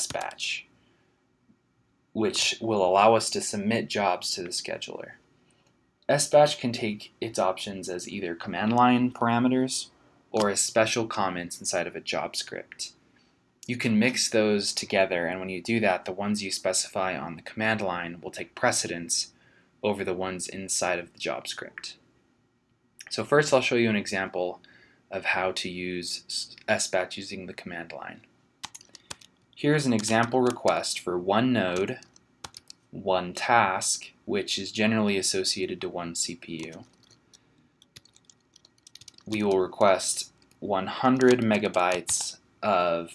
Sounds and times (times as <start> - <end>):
Speech: 0.0 - 0.7, 2.1 - 5.2, 6.1 - 13.0, 13.6 - 22.0, 23.0 - 28.3, 29.6 - 32.1, 32.9 - 36.9, 39.2 - 43.1.